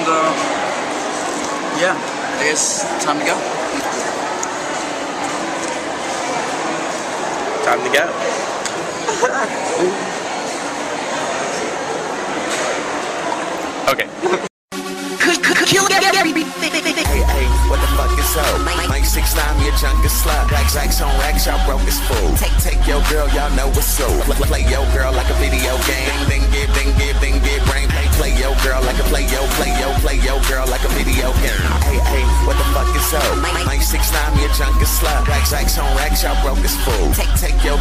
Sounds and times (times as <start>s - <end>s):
Inside, public space: 0.0s - 37.8s.